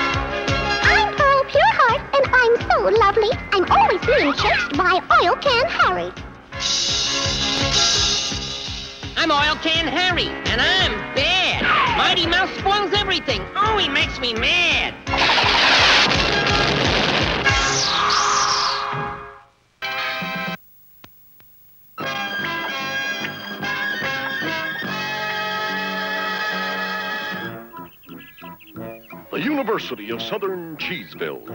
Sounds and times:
Music: 0.0 - 20.6, 22.0 - 31.5.

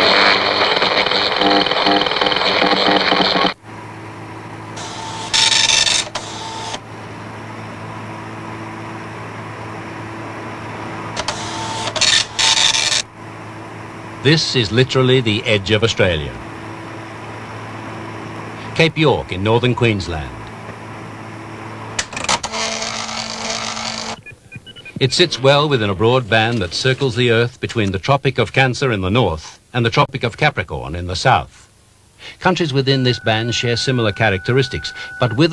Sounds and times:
Speech: 14.2 - 16.5, 18.7 - 20.5, 25.0 - 31.7, 32.3 - 35.5.

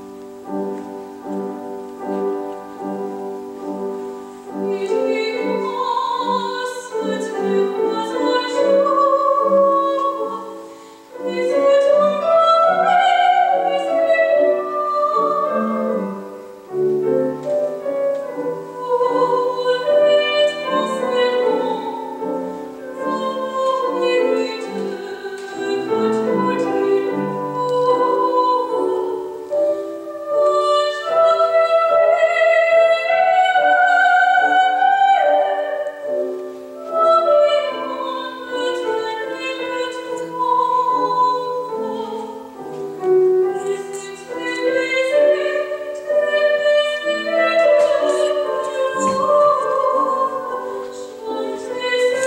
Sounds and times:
Music: 0.0 - 52.2.

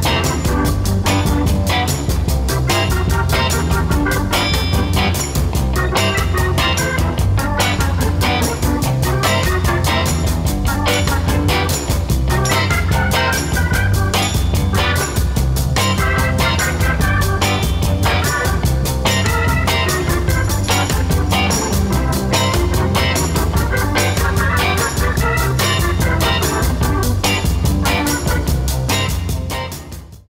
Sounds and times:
Ska: 0.0 - 30.3.

